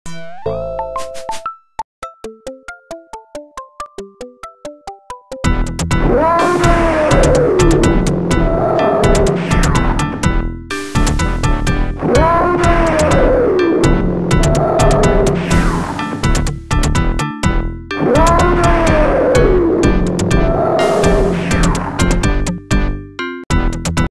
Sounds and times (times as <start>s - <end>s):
Music: 0.1s - 24.1s.